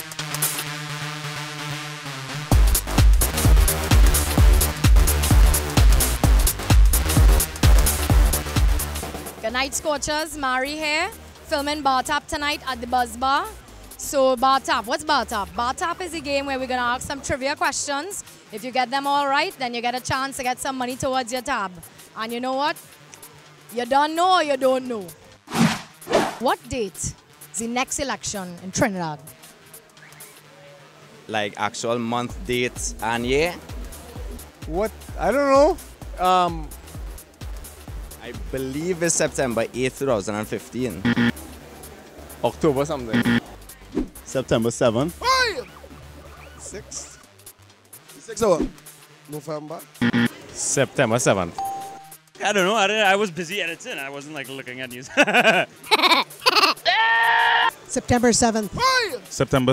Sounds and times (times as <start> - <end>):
Music: 0.0 - 59.7.